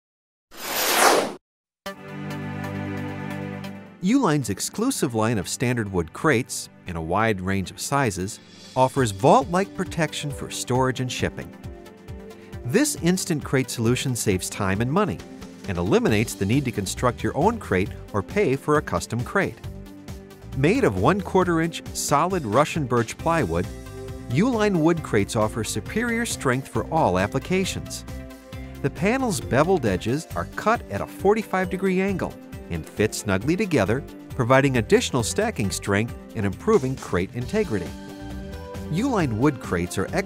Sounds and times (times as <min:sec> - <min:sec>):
Music: 0:01.9 - 0:40.2
Speech: 0:04.0 - 0:11.5, 0:12.7 - 0:19.6, 0:20.6 - 0:23.7, 0:24.3 - 0:28.0, 0:28.8 - 0:38.0, 0:38.9 - 0:40.2.